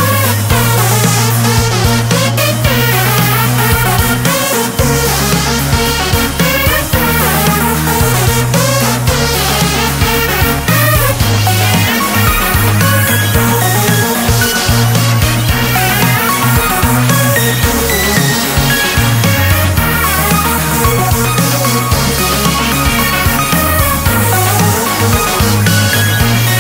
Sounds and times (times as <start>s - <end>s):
Theme music: 0.0s - 26.6s.